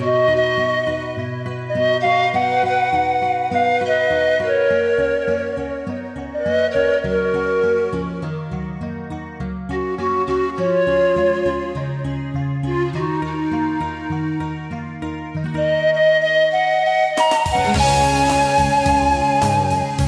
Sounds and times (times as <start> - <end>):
Music: 0.0 - 20.0.